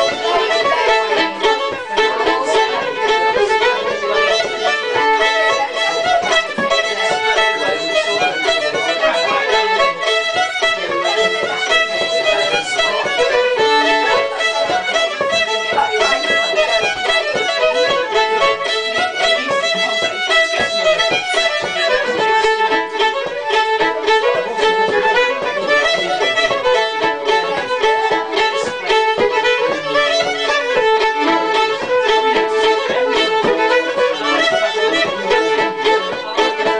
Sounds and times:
Speech: 0:00.0 - 0:36.7
Violin, fiddle: 0:00.0 - 0:36.7.

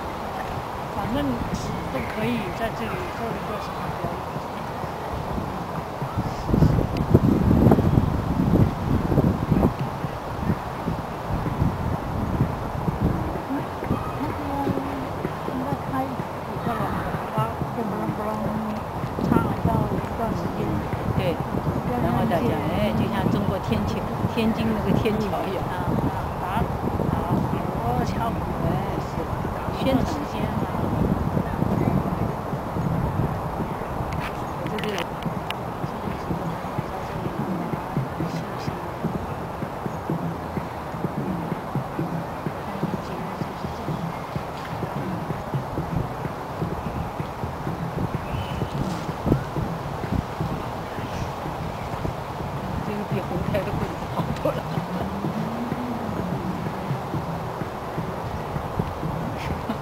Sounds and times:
Speech: 0:00.9 - 0:04.7, 0:13.2 - 0:32.5, 0:34.2 - 0:35.2, 0:35.8 - 0:39.4, 0:41.0 - 0:45.6, 0:52.8 - 0:57.3.

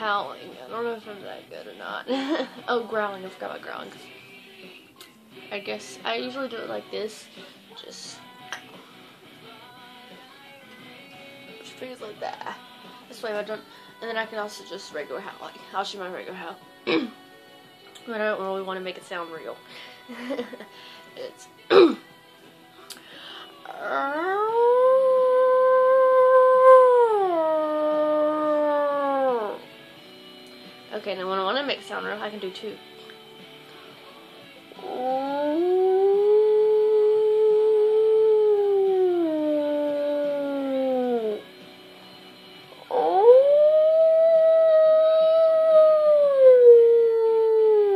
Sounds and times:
Music: 0:00.0 - 0:47.9.

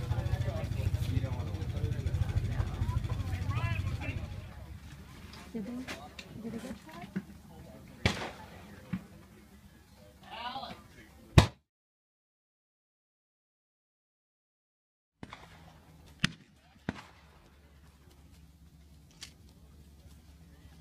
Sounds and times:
Slap, smack: 0:11.4 - 0:11.6.

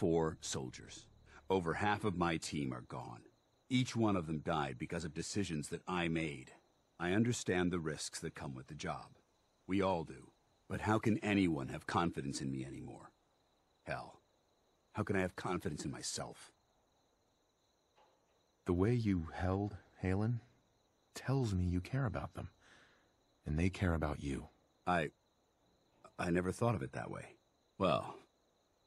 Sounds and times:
Speech: 0:00.0 - 0:13.1, 0:13.9 - 0:14.2, 0:15.0 - 0:16.5, 0:18.7 - 0:20.5, 0:21.1 - 0:22.5, 0:23.4 - 0:25.1, 0:26.1 - 0:28.2.

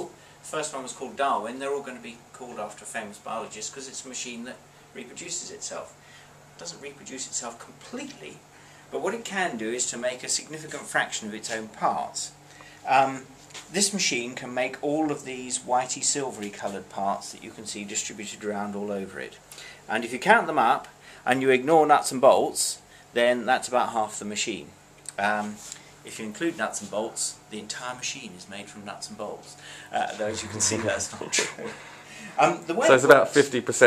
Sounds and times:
Speech: 0:00.0 - 0:06.0, 0:06.6 - 0:31.7, 0:32.3 - 0:33.8.

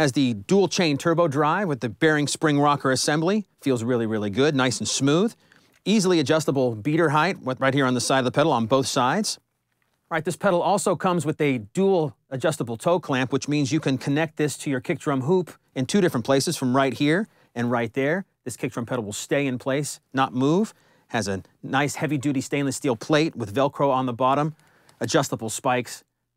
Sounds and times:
Speech: 0:00.0 - 0:09.5, 0:10.1 - 0:26.1.

